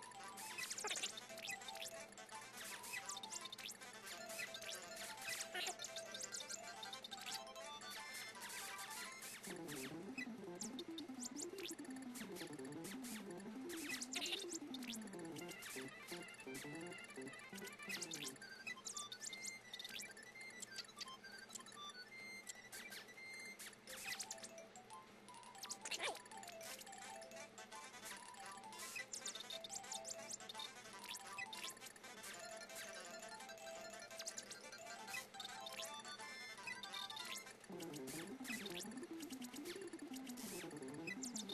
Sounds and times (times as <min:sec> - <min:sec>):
Music: 0:00.0 - 0:41.5.